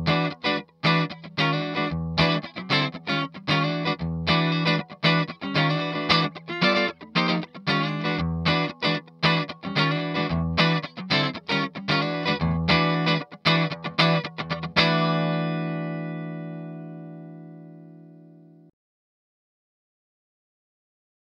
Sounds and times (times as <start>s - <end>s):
Music: 0.0s - 18.7s.